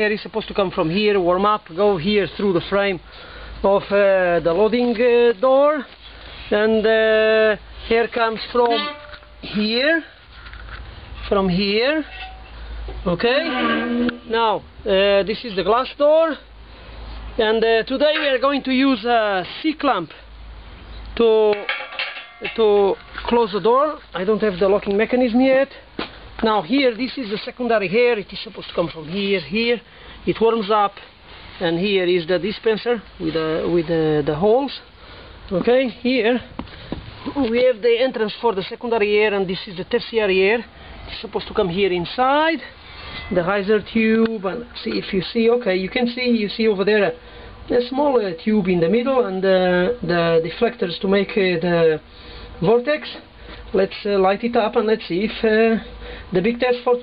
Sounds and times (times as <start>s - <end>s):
Speech: 0.0s - 3.0s, 3.6s - 5.9s, 6.5s - 10.1s, 11.2s - 12.2s, 13.0s - 16.5s, 17.4s - 20.3s, 21.2s - 21.7s, 22.4s - 25.8s, 26.4s - 34.9s, 35.5s - 36.5s, 37.2s - 57.0s.